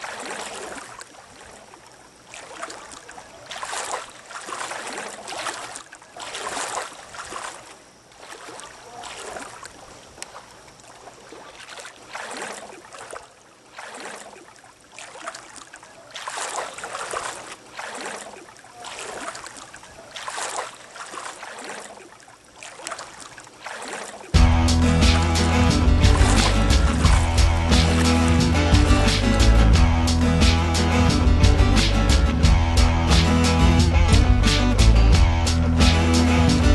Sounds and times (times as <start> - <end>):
Music: 24.4 - 36.7.